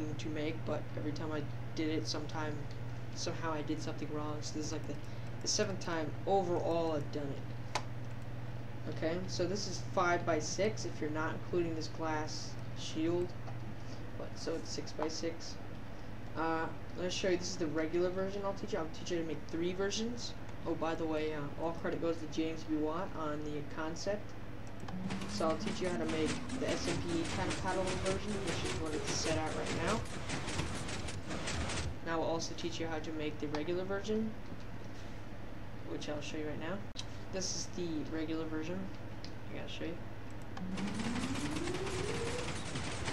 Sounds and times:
Speech: 0:00.0 - 0:07.4, 0:08.8 - 0:13.4, 0:14.2 - 0:15.6, 0:16.4 - 0:24.3, 0:25.3 - 0:30.1, 0:32.0 - 0:34.4, 0:35.8 - 0:40.0.

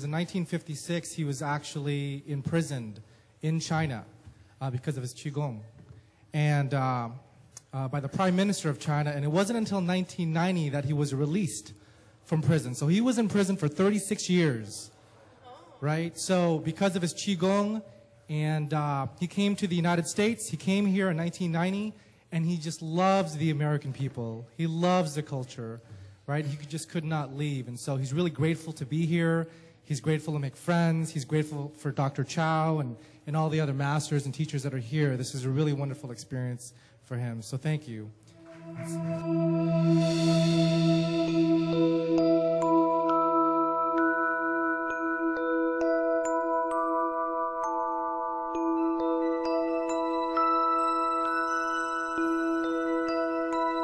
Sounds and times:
Music: 0:38.4 - 0:53.8.

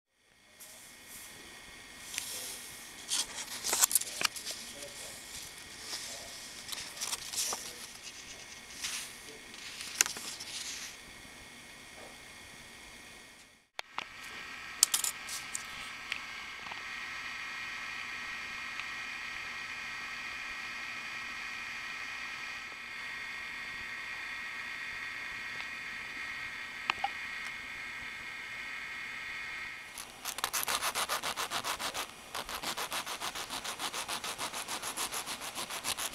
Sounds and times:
Inside, small room: 0:00.1 - 0:36.1.

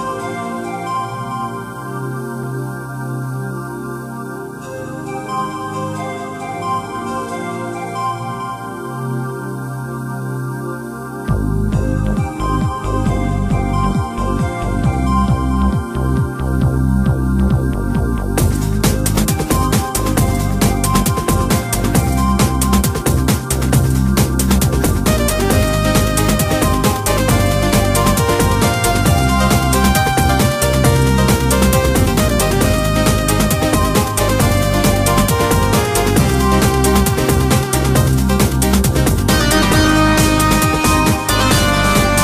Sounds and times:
Theme music: 0:11.3 - 0:42.2.

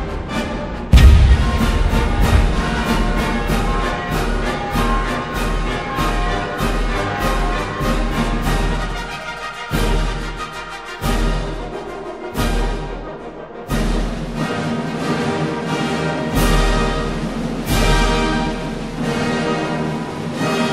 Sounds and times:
Music: 0:00.0 - 0:20.7.

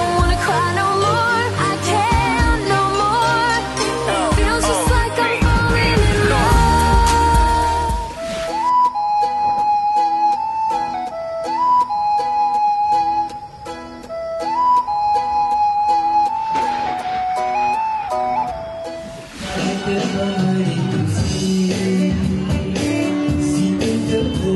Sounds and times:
Music: 0:00.0 - 0:24.5.

